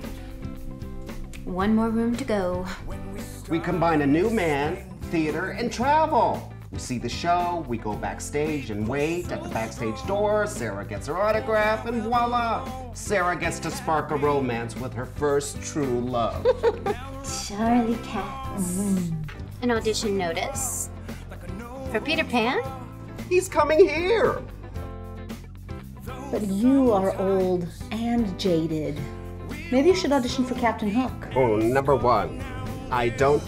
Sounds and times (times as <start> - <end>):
Music: 0.0 - 33.4.